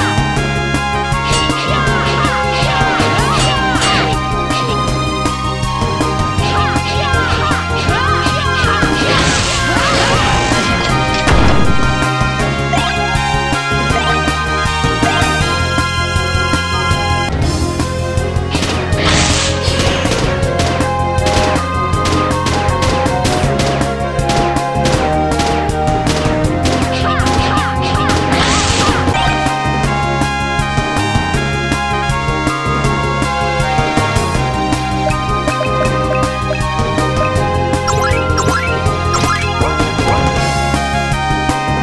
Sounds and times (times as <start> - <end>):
Music: 0.0 - 41.8.